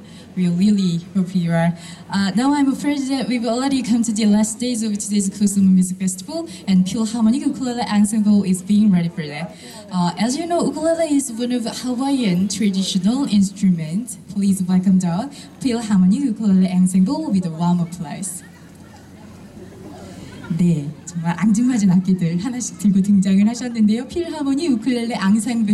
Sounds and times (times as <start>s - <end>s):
Speech: 0.4s - 19.4s, 20.0s - 25.7s.